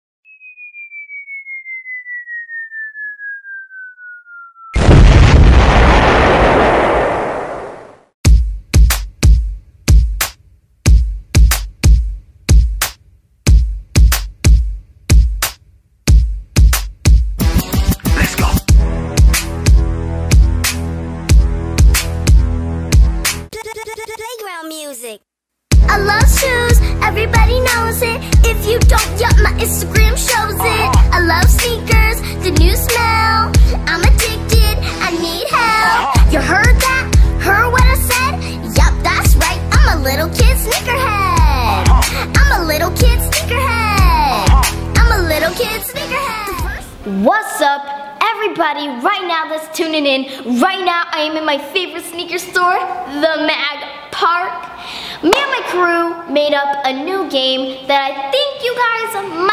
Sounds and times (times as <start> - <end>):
Music: 8.2 - 23.6, 25.7 - 47.0.